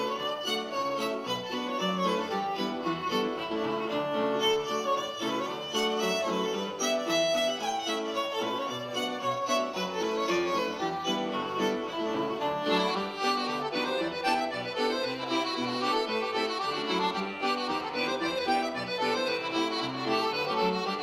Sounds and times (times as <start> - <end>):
Bowed string instrument: 0.0 - 21.0.